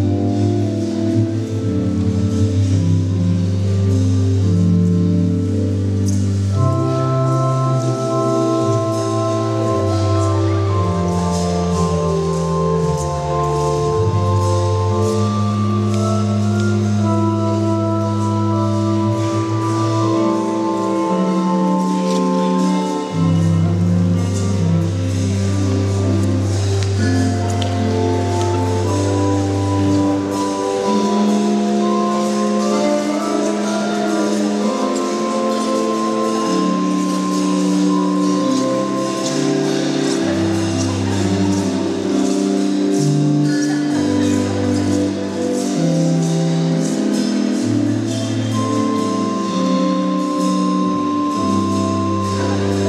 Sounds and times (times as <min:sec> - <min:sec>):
House music: 0:00.0 - 0:52.8.